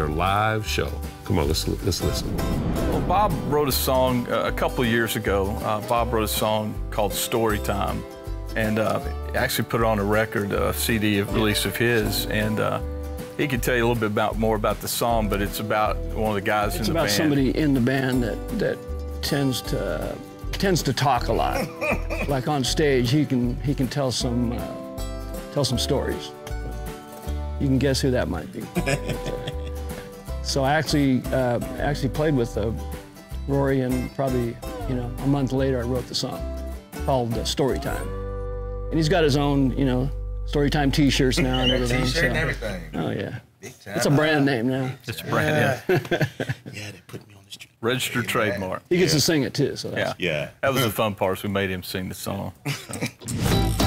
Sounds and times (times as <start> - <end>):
Speech: 0.0 - 2.3, 3.0 - 8.0, 8.6 - 12.8, 13.4 - 21.7, 22.3 - 24.8, 25.6 - 26.3, 27.6 - 28.8, 30.4 - 32.8, 33.5 - 36.4, 37.1 - 38.1, 38.9 - 45.9, 46.7 - 52.6
Music: 0.0 - 43.0, 53.2 - 53.8.